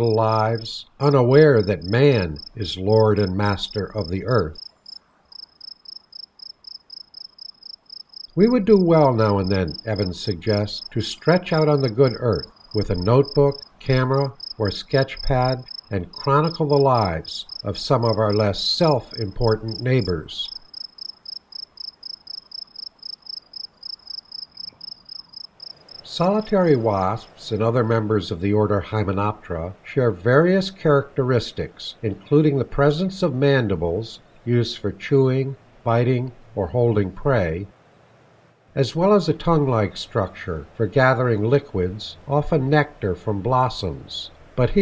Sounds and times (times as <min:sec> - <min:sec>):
Cricket: 0:04.6 - 0:08.4, 0:11.6 - 0:26.5.